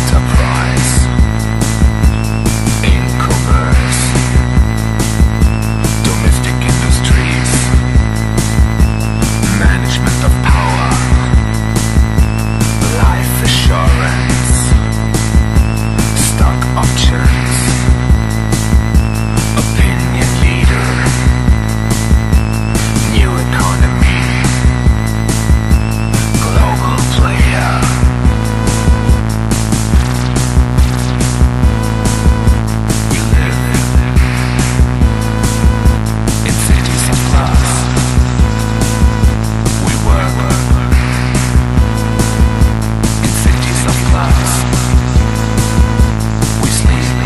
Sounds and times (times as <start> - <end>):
Music: 0.0 - 47.2.